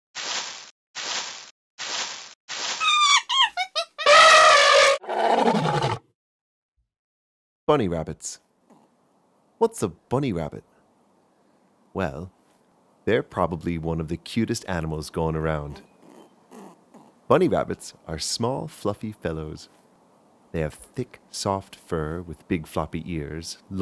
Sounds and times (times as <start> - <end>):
Speech: 7.7 - 8.4, 9.6 - 10.7, 12.0 - 12.4, 13.1 - 15.9, 17.3 - 19.7, 20.6 - 23.8.